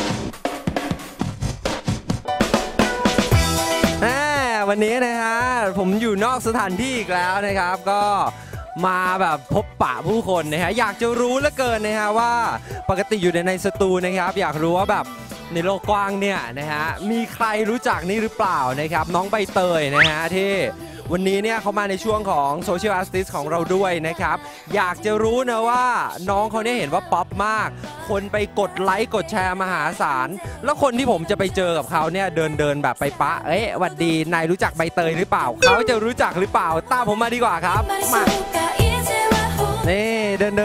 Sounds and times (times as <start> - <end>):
Music: 0.0 - 40.6
Speech: 4.0 - 38.3, 39.9 - 40.6.